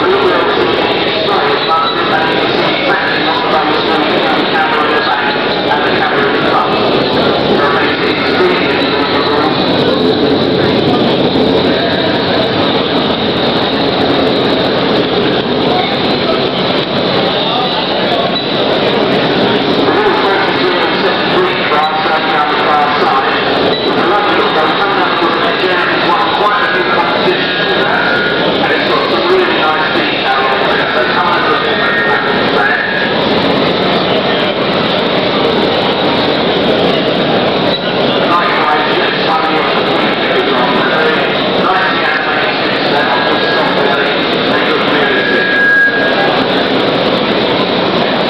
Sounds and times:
Speech: 0:00.0 - 0:48.3.

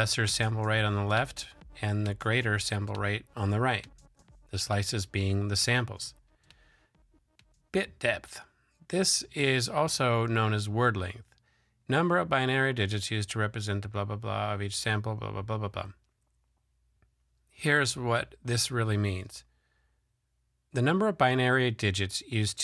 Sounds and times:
Speech: 0:00.0 - 0:03.9, 0:04.5 - 0:06.2, 0:07.7 - 0:11.3, 0:11.9 - 0:16.0, 0:17.6 - 0:19.5, 0:20.7 - 0:22.6.

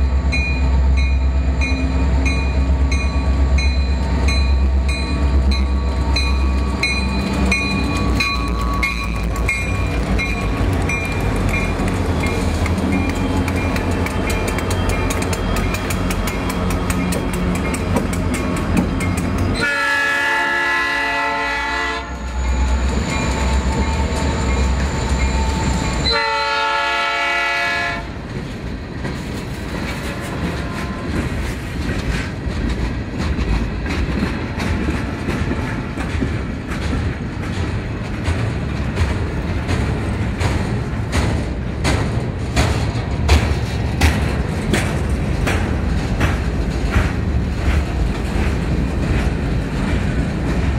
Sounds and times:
Outside, urban or manmade: 0:00.0 - 0:50.7
Railroad car, train wagon: 0:00.0 - 0:50.7
Train: 0:00.0 - 0:50.7.

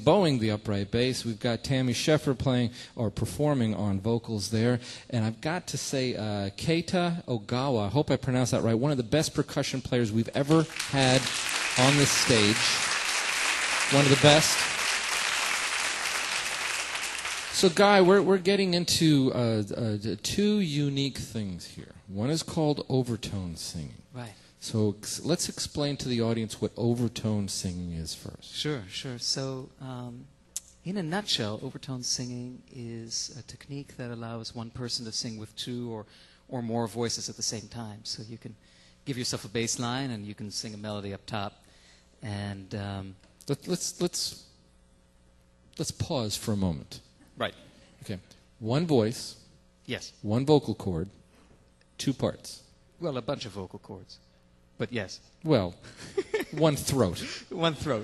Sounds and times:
Speech: 0:00.0 - 0:12.9, 0:13.9 - 0:14.7, 0:17.5 - 0:41.6, 0:42.2 - 0:44.5, 0:45.8 - 0:51.2, 0:52.0 - 0:55.8, 0:56.5 - 0:58.0.

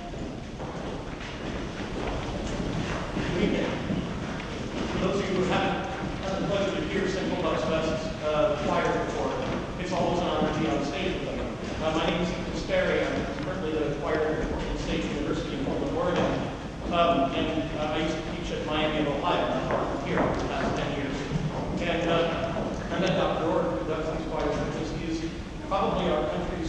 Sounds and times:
Speech: 0:03.2 - 0:03.9, 0:04.8 - 0:26.6.

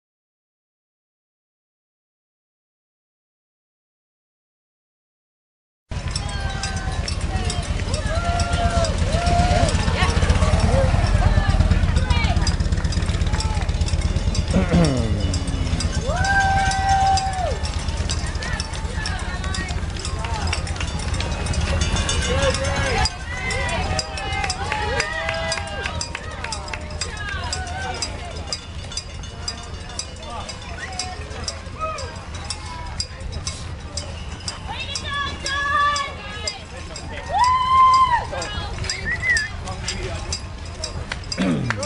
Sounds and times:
Outside, urban or manmade: 0:05.9 - 0:41.8.

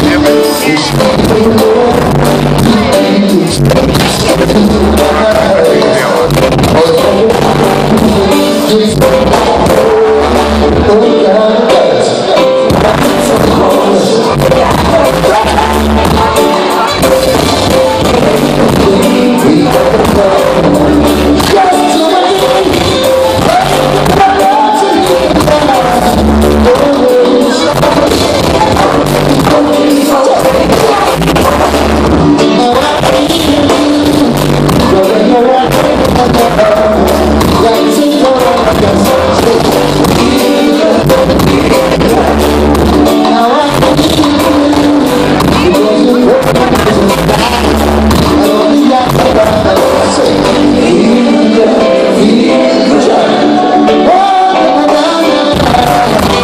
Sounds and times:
Reggae: 0:00.0 - 0:56.4.

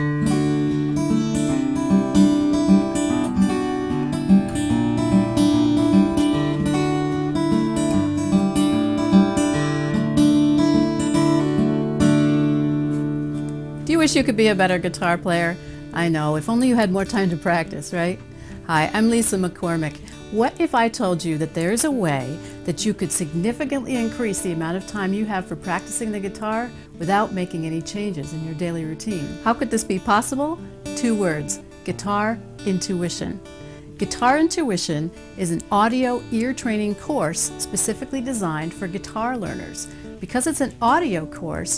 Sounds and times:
Acoustic guitar: 0:00.0 - 0:41.7
Strum: 0:00.0 - 0:41.7
Speech: 0:13.9 - 0:33.4, 0:34.0 - 0:41.7.

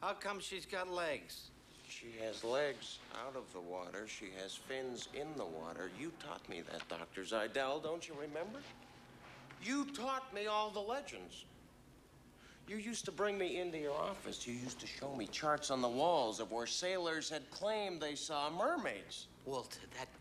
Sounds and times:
Speech: 0:00.0 - 0:08.7, 0:09.6 - 0:11.5, 0:12.7 - 0:20.2.

